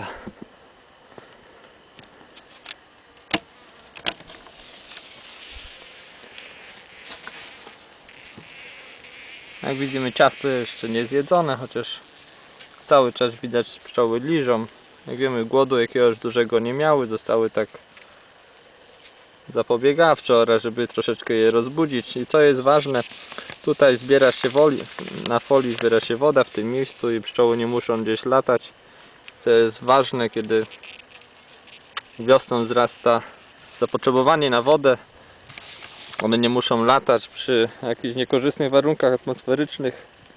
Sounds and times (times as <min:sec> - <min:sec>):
Bee, wasp, etc.: 0:00.0 - 0:40.3
Fly, housefly: 0:00.0 - 0:40.3.